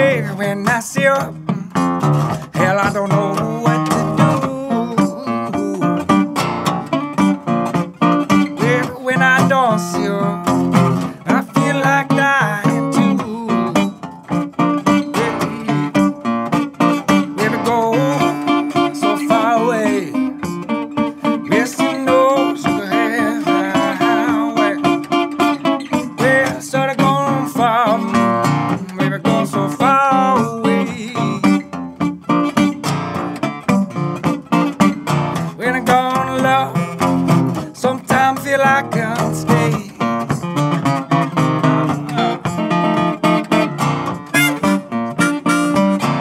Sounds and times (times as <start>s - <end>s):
Plucked string instrument: 0.0s - 46.2s.